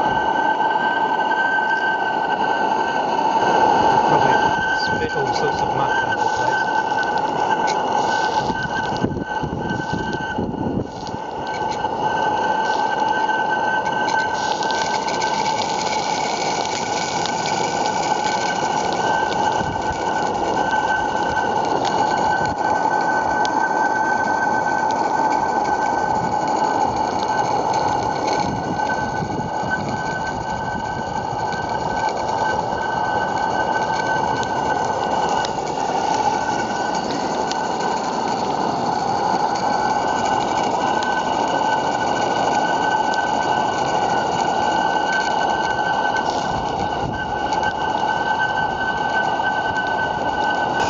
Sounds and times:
Engine: 0.0 - 50.9
Vehicle: 0.0 - 50.9.

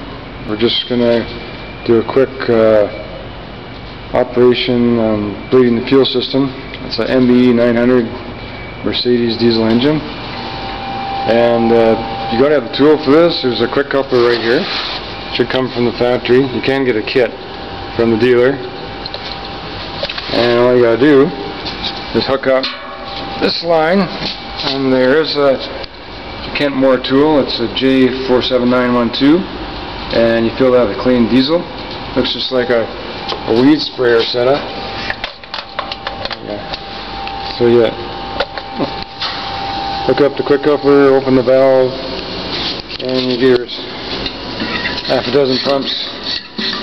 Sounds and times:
Speech: 0.4 - 3.1, 4.1 - 8.2, 8.8 - 10.1, 11.3 - 17.4, 18.0 - 18.8, 20.3 - 21.4, 22.1 - 22.8, 23.4 - 25.8, 26.5 - 29.5, 30.1 - 34.7, 36.3 - 36.8, 37.5 - 38.1, 40.0 - 42.1, 43.0 - 43.9, 45.1 - 46.2.

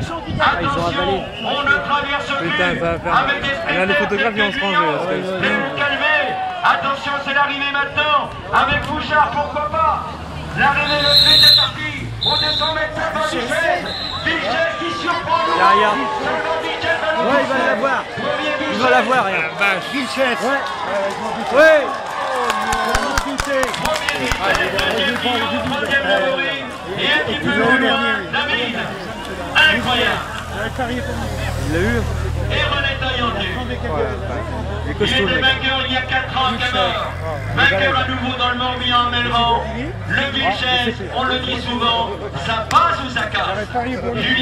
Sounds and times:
Speech: 0.0 - 22.0, 22.7 - 44.4.

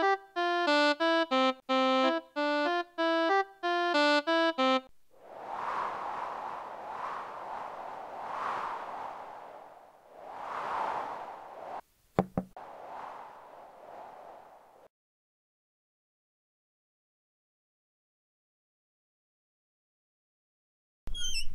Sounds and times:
Music: 0.0 - 4.9.

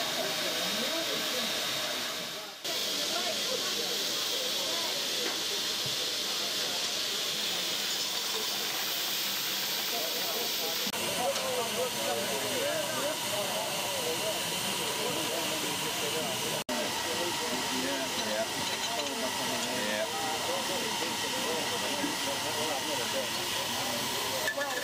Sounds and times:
Speech: 0.0 - 9.0, 9.8 - 24.8.

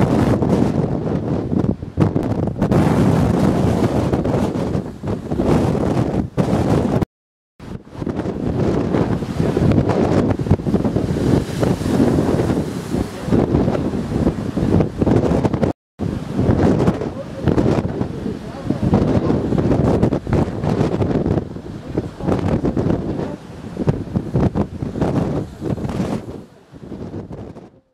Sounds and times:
Outside, rural or natural: 0.0 - 27.9
Speech: 13.0 - 14.0, 16.9 - 19.5, 21.8 - 23.5.

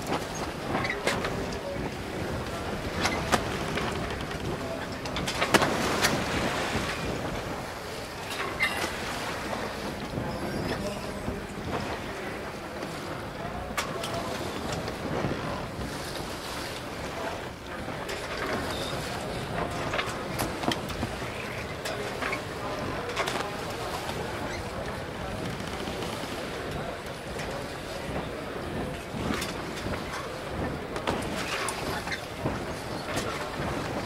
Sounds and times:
Boat, Water vehicle: 0.0 - 34.0
Speech: 0.0 - 34.0.

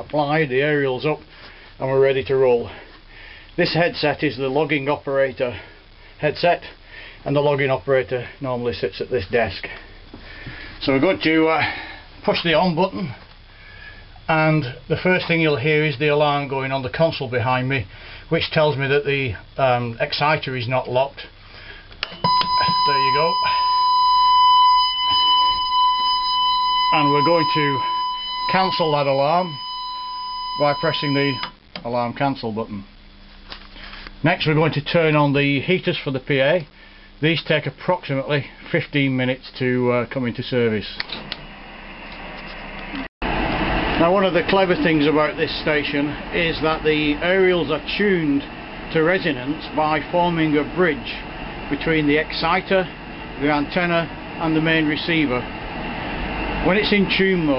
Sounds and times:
Speech: 0.0 - 1.2, 1.8 - 2.8, 3.6 - 9.8, 10.8 - 13.2, 14.3 - 21.4, 22.6 - 23.6, 26.9 - 27.9, 28.5 - 29.6, 30.6 - 32.9, 34.2 - 41.1, 44.0 - 55.5, 56.6 - 57.5
Alarm: 22.0 - 31.6.

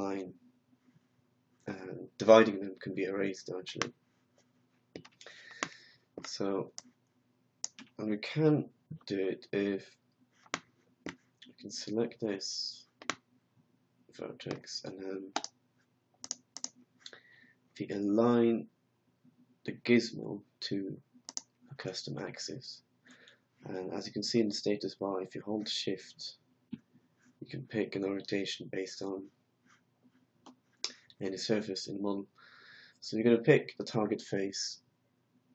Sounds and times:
Speech: 0.0 - 0.4, 1.7 - 3.9, 6.2 - 6.8, 7.8 - 10.0, 11.4 - 12.9, 14.1 - 15.4, 17.8 - 18.7, 19.7 - 21.0, 21.8 - 22.8, 23.6 - 26.4, 27.4 - 29.3, 30.9 - 32.4, 33.0 - 34.8.

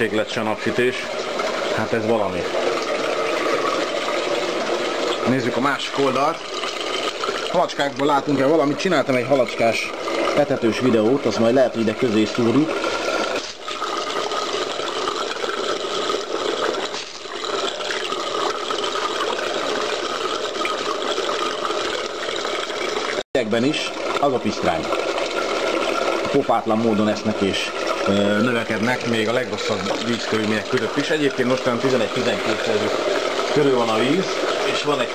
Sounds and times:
Speech: 0.0 - 1.1, 1.7 - 2.5, 5.2 - 6.4, 7.5 - 12.7, 23.4 - 24.9, 26.2 - 32.9, 33.6 - 35.1.

